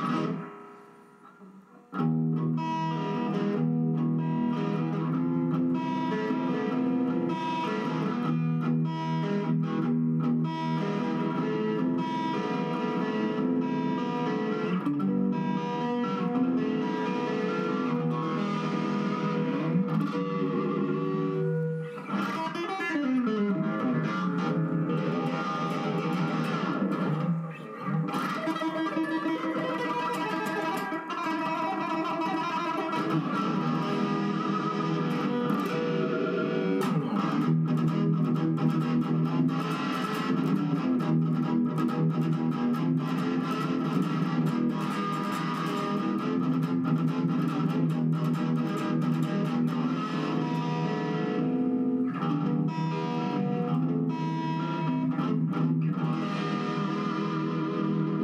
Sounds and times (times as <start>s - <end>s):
Bass guitar: 14.8s - 31.6s.